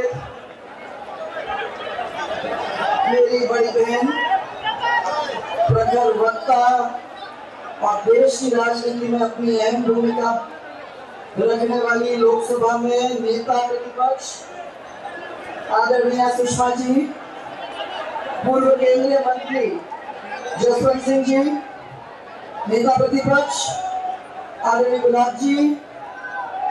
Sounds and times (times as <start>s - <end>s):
Female speech, woman speaking: 3.1s - 4.2s, 5.7s - 7.0s, 7.8s - 10.5s, 11.4s - 14.4s, 15.7s - 17.1s, 18.4s - 19.9s, 20.5s - 21.6s, 22.7s - 23.9s, 24.6s - 25.8s.